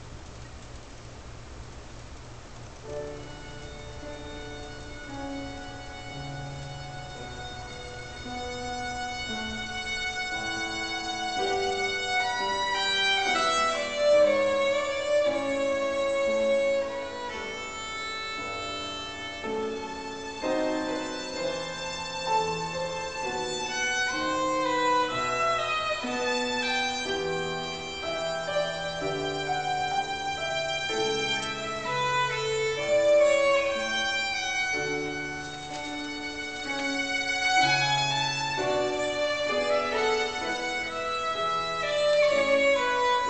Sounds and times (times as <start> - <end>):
Violin, fiddle: 2.9 - 43.3.